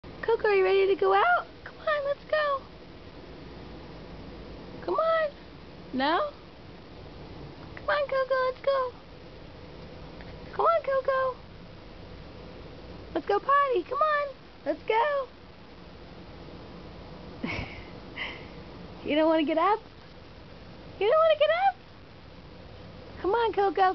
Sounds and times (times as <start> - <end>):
Speech: 0.2 - 2.7, 4.8 - 6.4, 7.8 - 9.0, 10.5 - 11.4, 13.2 - 15.3, 19.0 - 19.8, 21.0 - 21.8, 23.2 - 23.9.